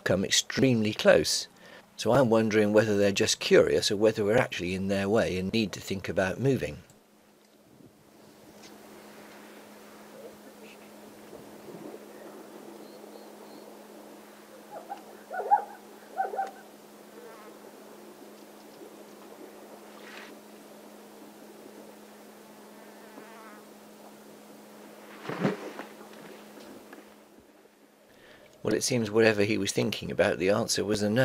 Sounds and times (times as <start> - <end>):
Animal: 14.5 - 17.6.